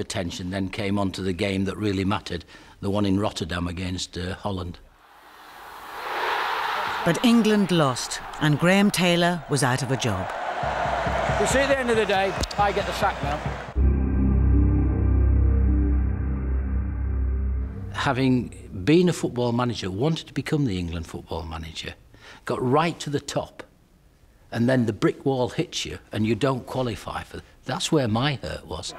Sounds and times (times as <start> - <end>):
Narration, monologue: 0.0 - 5.0, 7.0 - 10.3, 17.8 - 28.9.